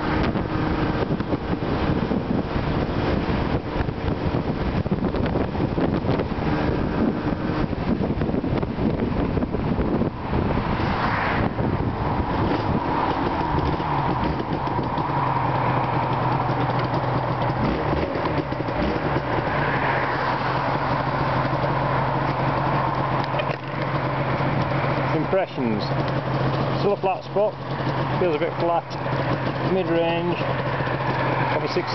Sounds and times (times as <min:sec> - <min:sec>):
Motorcycle: 0:00.0 - 0:31.9
Outside, rural or natural: 0:00.0 - 0:31.9.